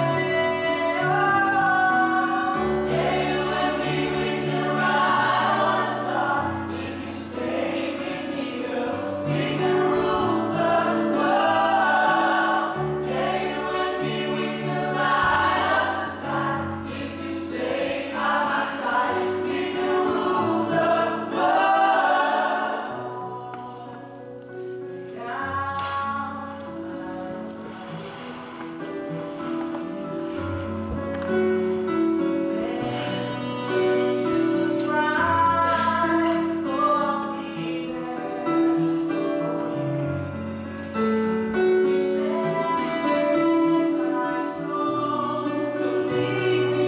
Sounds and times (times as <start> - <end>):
Choir: 0.0 - 28.1, 29.3 - 46.8.